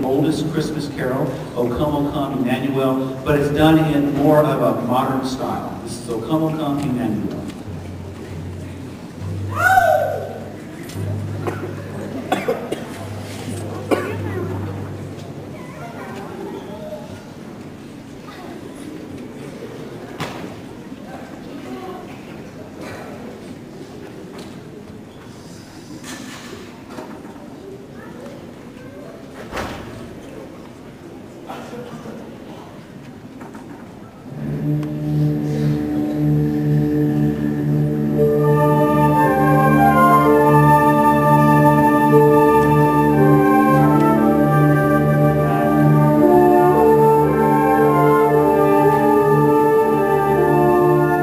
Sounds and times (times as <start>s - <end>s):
Speech: 0.0s - 7.6s, 31.4s - 32.8s.